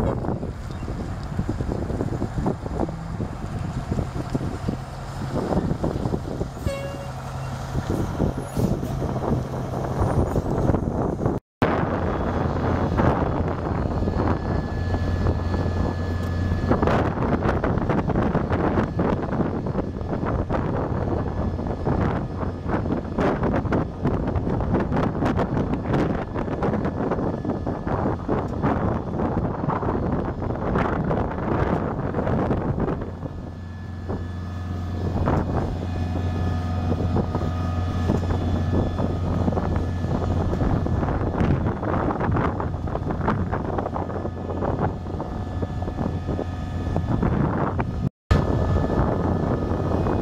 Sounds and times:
Vehicle: 0.0 - 50.2.

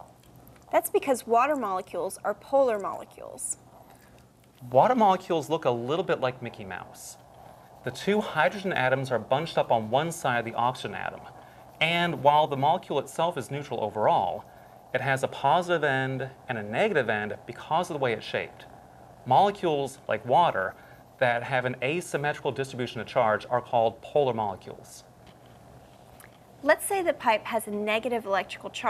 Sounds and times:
Speech: 0.8 - 3.6, 4.6 - 7.2, 7.9 - 14.4, 15.0 - 18.6, 19.3 - 25.0, 26.6 - 28.8.

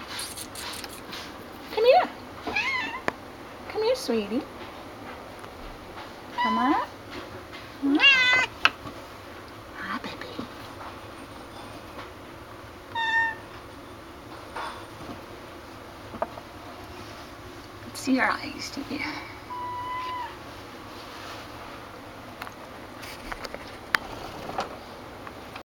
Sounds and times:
Speech: 1.7 - 2.2, 3.7 - 4.5, 6.4 - 6.9, 9.8 - 10.6, 17.9 - 19.4.

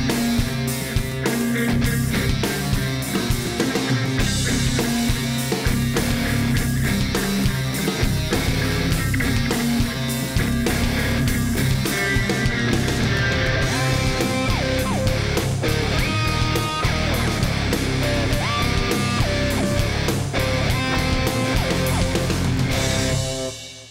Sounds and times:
Music: 0.0 - 23.9.

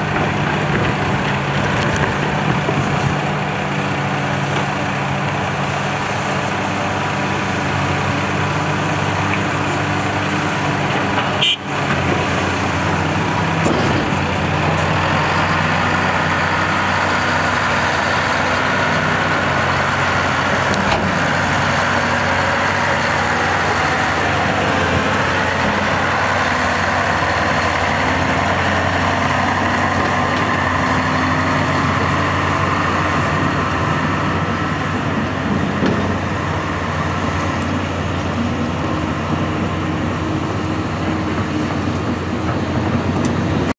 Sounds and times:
Outside, rural or natural: 0.0 - 43.7
Truck: 0.0 - 43.7.

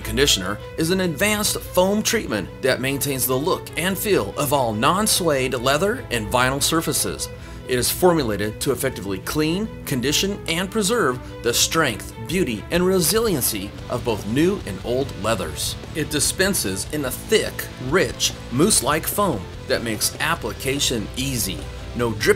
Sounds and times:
Music: 0.0 - 22.3
Speech: 0.0 - 22.3.

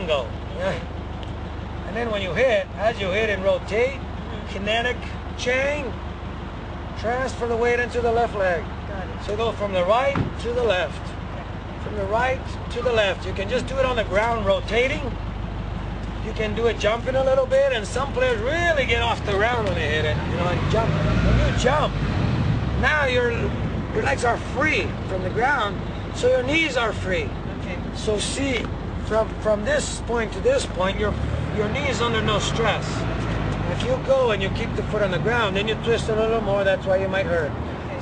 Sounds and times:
Outside, urban or manmade: 0.0 - 38.0
Speech: 1.8 - 6.0, 7.0 - 11.1, 11.8 - 15.2, 16.2 - 21.9, 22.8 - 38.0.

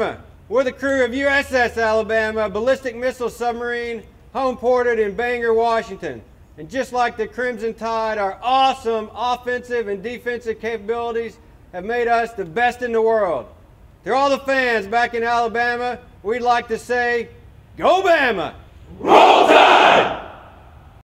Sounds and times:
Speech: 0.0 - 13.5, 14.1 - 18.6.

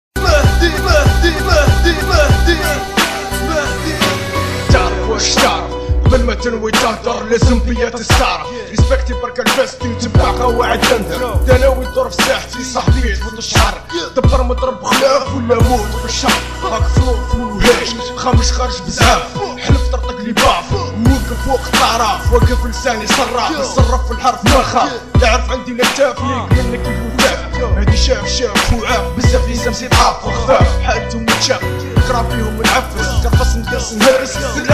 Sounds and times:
Hip hop music: 0.1 - 34.7
Rapping: 0.2 - 34.7.

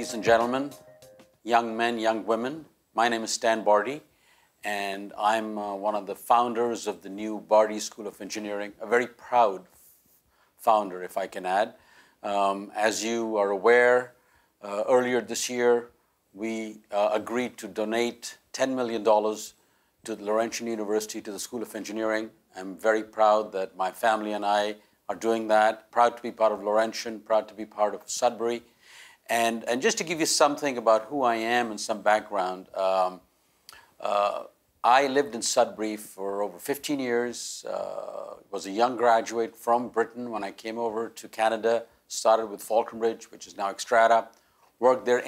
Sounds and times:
Male speech, man speaking: 0.0 - 0.8, 1.5 - 4.1, 4.7 - 9.7, 10.6 - 28.7, 29.3 - 33.3, 34.0 - 45.2
Narration, monologue: 0.0 - 45.2.

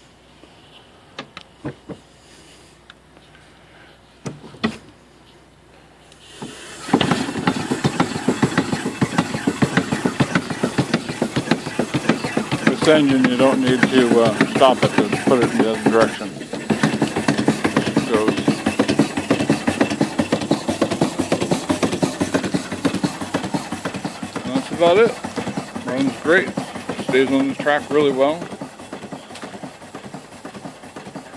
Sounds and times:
Engine: 0.0 - 31.3
Speech: 12.7 - 16.3, 18.0 - 18.5, 24.4 - 25.2, 25.8 - 28.5.

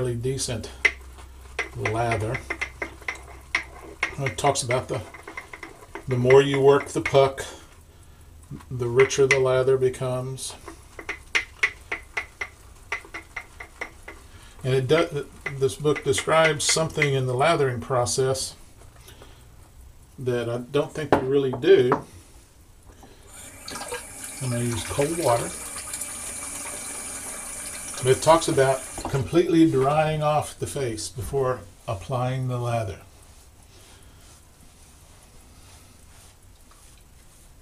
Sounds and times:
Water: 23.3 - 29.4
Water tap, faucet: 23.3 - 29.4.

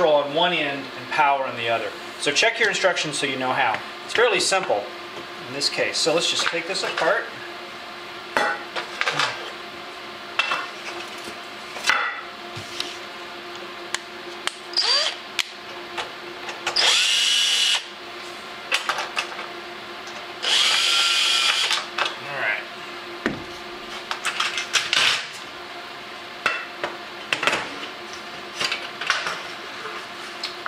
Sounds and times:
Speech: 0.0 - 7.4, 22.2 - 22.7.

